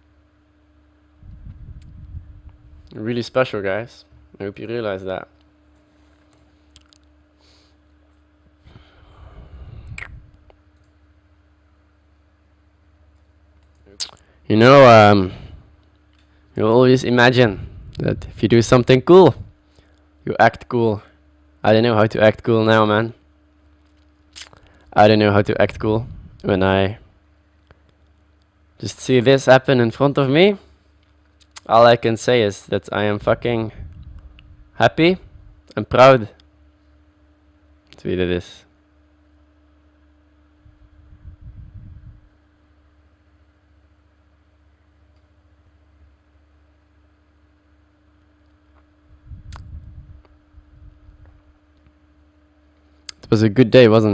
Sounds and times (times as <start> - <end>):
Narration, monologue: 0.6 - 40.3, 46.5 - 54.1
Male speech, man speaking: 2.9 - 5.3, 14.5 - 15.4, 16.6 - 19.4, 20.3 - 23.2, 25.0 - 27.0, 28.8 - 30.6, 31.7 - 33.8, 34.8 - 36.4, 38.0 - 38.7, 53.2 - 54.1.